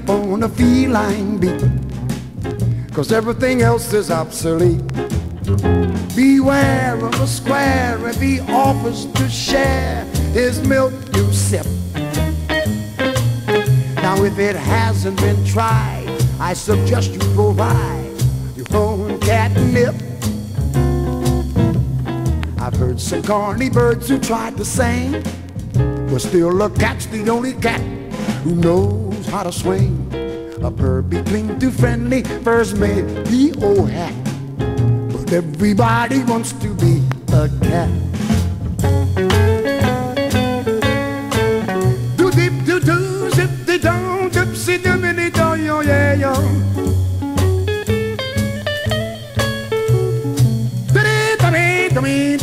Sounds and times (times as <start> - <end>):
Music: 0.0 - 52.4.